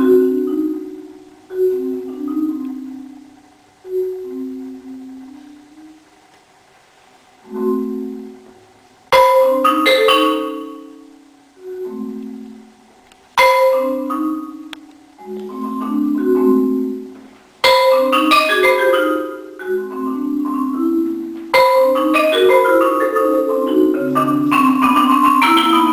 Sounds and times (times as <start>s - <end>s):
Marimba, xylophone: 0.0s - 6.2s, 7.4s - 25.9s.